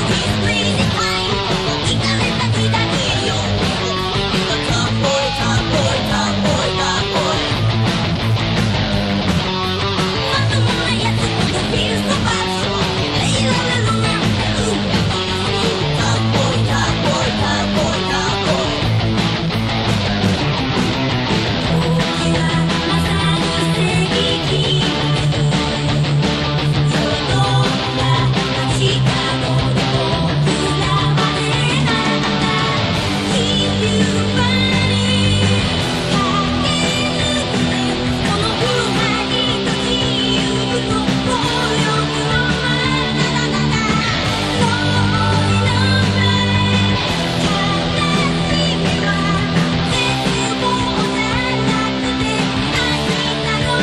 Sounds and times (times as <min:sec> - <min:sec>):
Guitar: 0:00.0 - 0:53.8.